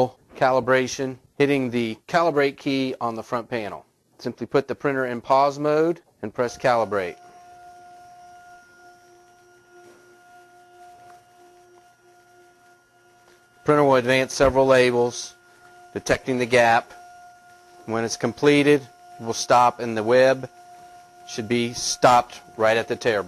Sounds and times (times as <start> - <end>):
Speech: 0.0 - 7.2, 13.7 - 15.4, 16.0 - 16.9, 17.9 - 20.5, 21.3 - 23.2
Printer: 6.4 - 23.2.